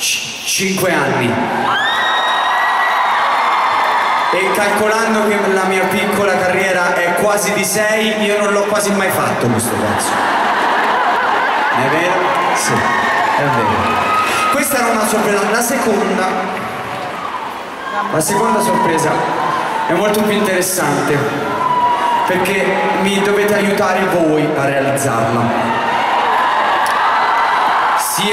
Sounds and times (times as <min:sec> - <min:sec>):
Speech: 0:00.0 - 0:01.4, 0:04.3 - 0:10.2, 0:11.8 - 0:13.8, 0:14.5 - 0:16.5, 0:18.1 - 0:19.2, 0:19.9 - 0:21.3, 0:22.3 - 0:25.6, 0:28.0 - 0:28.3.